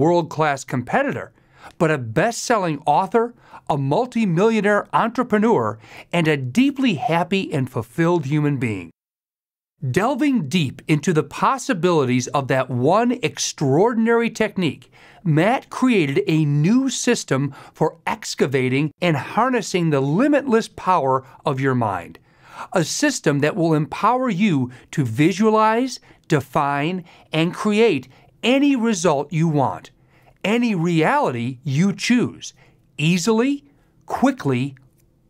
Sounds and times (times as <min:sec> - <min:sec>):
Narration, monologue: 0:00.0 - 0:35.2.